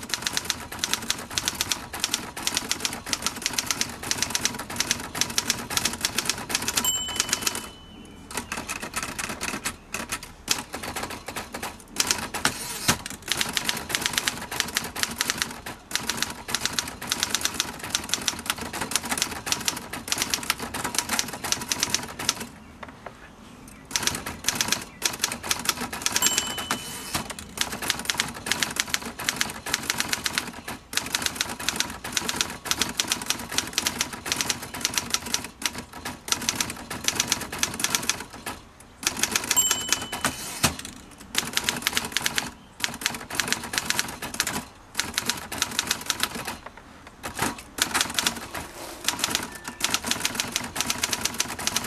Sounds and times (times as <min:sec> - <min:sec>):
Typewriter: 0:00.0 - 0:22.5, 0:23.9 - 0:51.8.